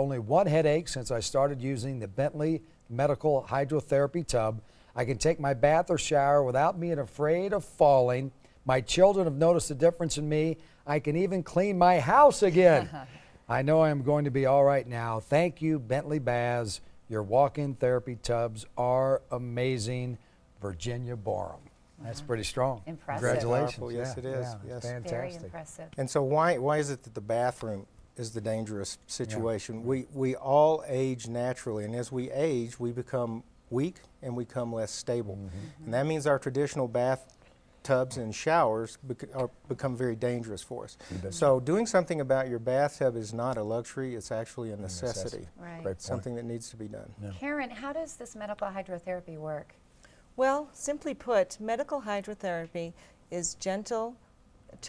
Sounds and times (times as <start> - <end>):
Speech: 0.0 - 37.2, 37.9 - 47.4.